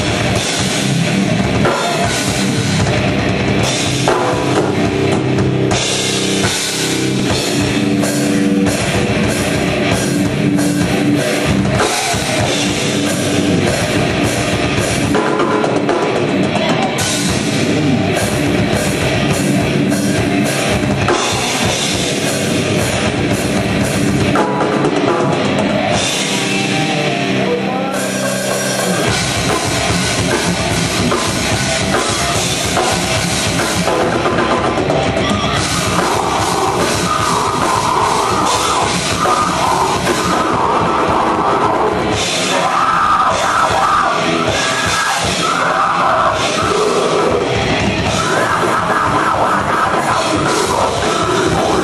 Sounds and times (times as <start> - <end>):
Music: 0.0 - 51.8.